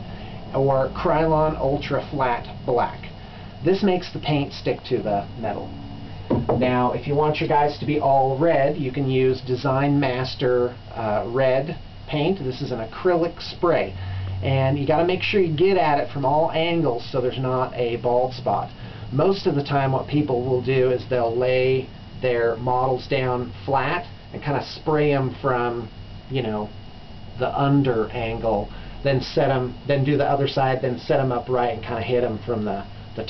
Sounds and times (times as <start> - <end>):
Speech: 0.5 - 5.7, 6.6 - 26.8, 27.4 - 33.2.